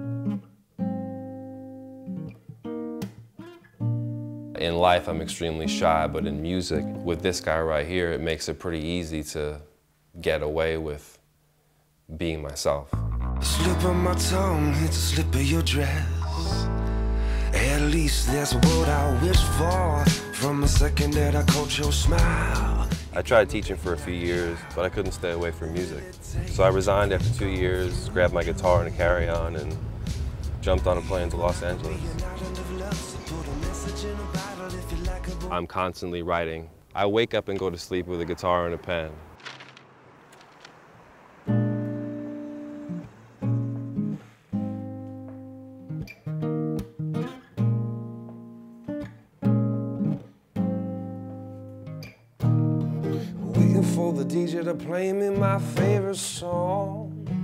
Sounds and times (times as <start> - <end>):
Music: 0.0 - 7.8, 12.9 - 35.6, 41.6 - 57.4
Speech: 4.6 - 11.2, 12.1 - 12.9, 23.1 - 29.8, 30.6 - 32.2, 35.5 - 39.2.